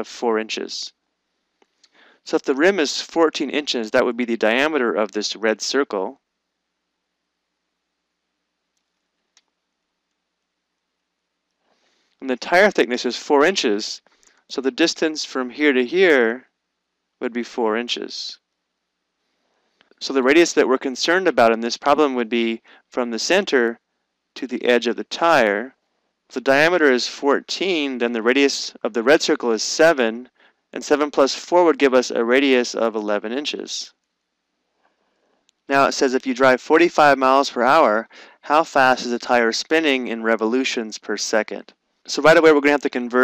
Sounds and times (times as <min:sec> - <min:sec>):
Speech: 0:00.0 - 0:00.9, 0:02.3 - 0:06.2, 0:12.2 - 0:16.4, 0:17.2 - 0:18.4, 0:20.0 - 0:23.8, 0:24.4 - 0:25.7, 0:26.3 - 0:33.9, 0:35.7 - 0:43.2.